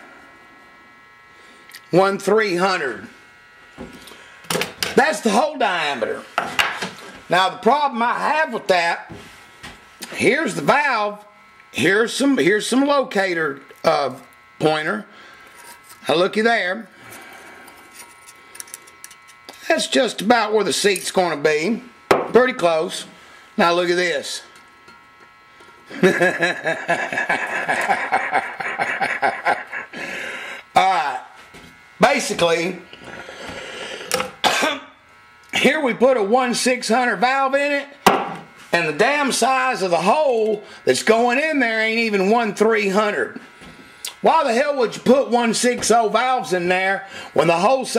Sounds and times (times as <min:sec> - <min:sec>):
Speech: 0:01.9 - 0:03.1, 0:05.0 - 0:06.3, 0:07.3 - 0:09.2, 0:10.0 - 0:15.1, 0:16.0 - 0:16.9, 0:19.6 - 0:24.5, 0:30.8 - 0:31.4, 0:32.0 - 0:32.9, 0:35.5 - 0:38.0, 0:38.7 - 0:43.4, 0:44.1 - 0:47.9.